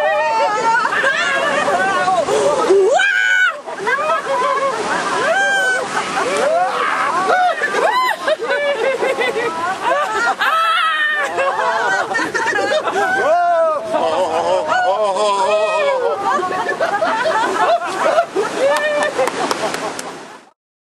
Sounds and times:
Snicker: 7.3 - 13.3, 16.1 - 20.1.

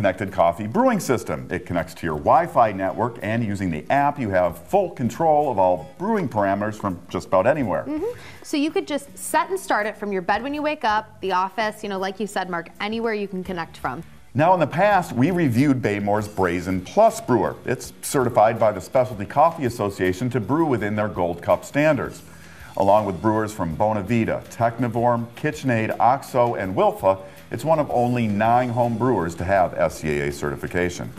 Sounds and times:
Speech: 0.0 - 22.2, 22.8 - 31.1
Music: 0.0 - 31.1.

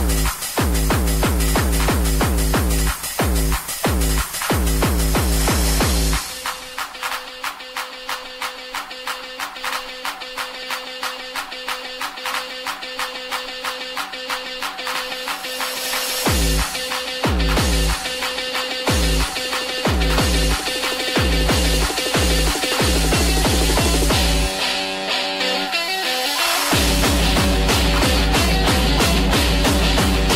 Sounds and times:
House music: 0.0 - 30.3.

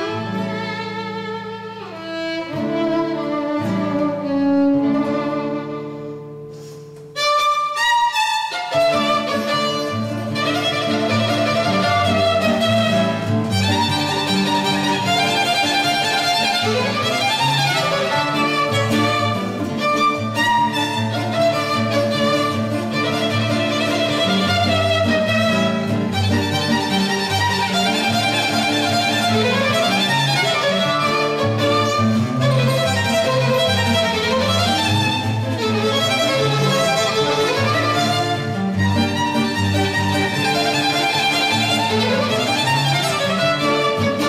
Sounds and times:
Violin, fiddle: 0.0 - 44.2.

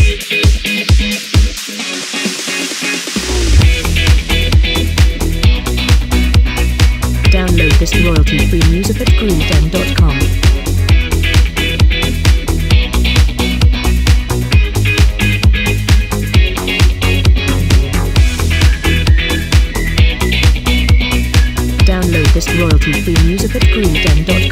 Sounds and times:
Background music: 0.0 - 24.5
Speech: 7.3 - 10.3, 21.8 - 24.5.

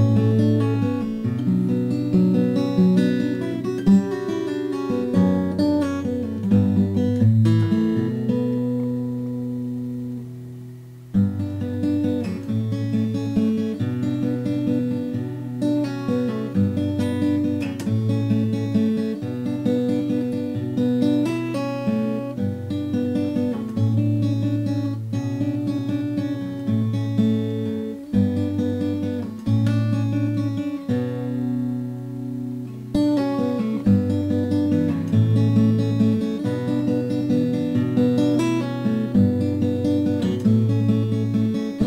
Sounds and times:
Acoustic guitar: 0.0 - 41.8
Inside, small room: 0.0 - 41.8.

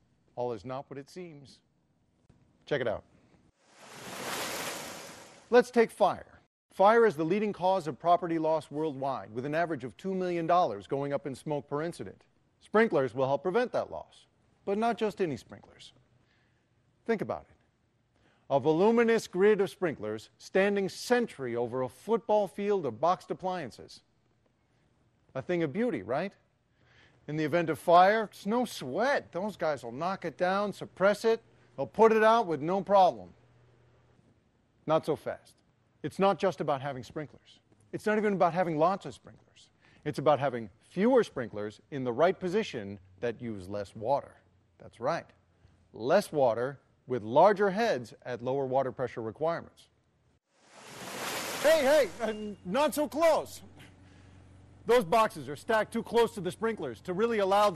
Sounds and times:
Speech: 0.4 - 1.6, 2.7 - 3.1, 5.6 - 16.0, 17.0 - 17.6, 18.5 - 24.1, 25.3 - 26.4, 27.3 - 33.4, 34.9 - 45.4, 46.0 - 50.0, 51.6 - 53.7, 54.9 - 57.7.

